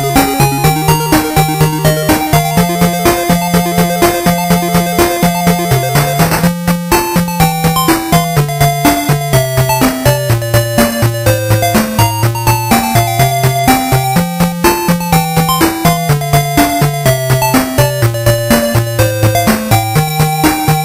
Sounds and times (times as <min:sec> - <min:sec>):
Video game music: 0:00.0 - 0:20.8.